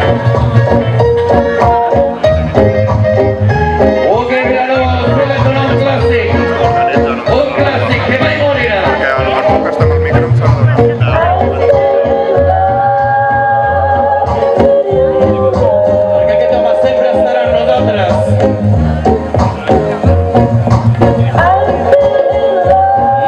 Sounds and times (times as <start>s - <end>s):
Chatter: 0.0s - 23.2s
Music: 0.0s - 23.2s
Speech: 4.1s - 11.7s.